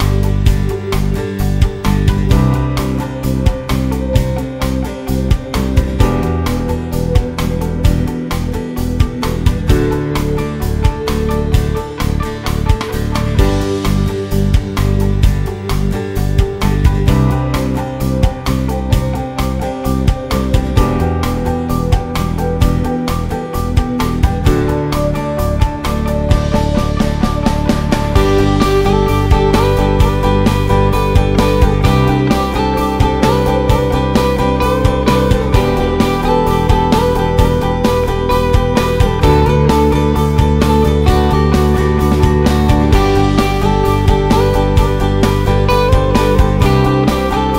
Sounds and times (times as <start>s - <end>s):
Music: 0.0s - 47.5s.